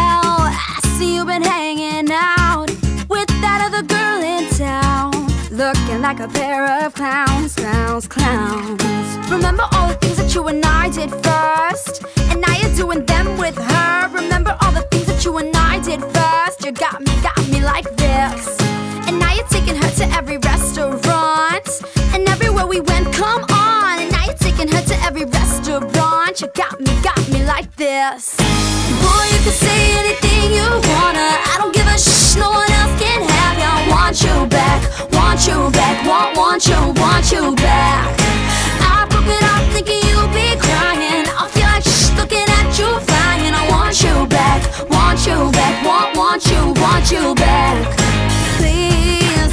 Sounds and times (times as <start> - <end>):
Music: 0.0 - 49.5.